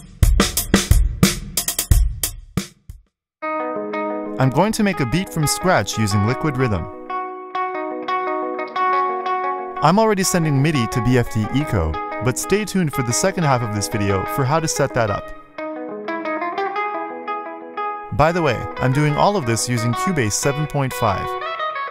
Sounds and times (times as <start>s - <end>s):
Music: 0.0s - 21.9s
Speech: 4.4s - 6.9s, 9.8s - 15.3s, 18.1s - 21.4s.